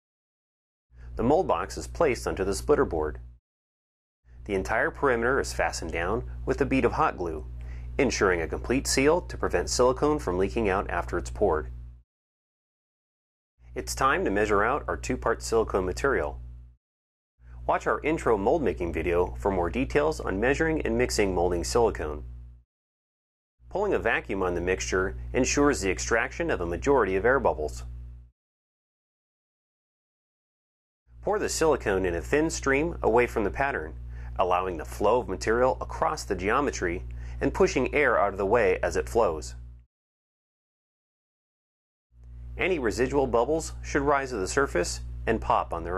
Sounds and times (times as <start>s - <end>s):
Speech: 1.2s - 3.2s, 4.4s - 11.7s, 13.8s - 16.4s, 17.7s - 22.2s, 23.7s - 27.9s, 31.2s - 39.6s, 42.6s - 45.9s
Inside, small room: 4.3s - 12.0s, 31.2s - 39.9s, 42.2s - 45.9s.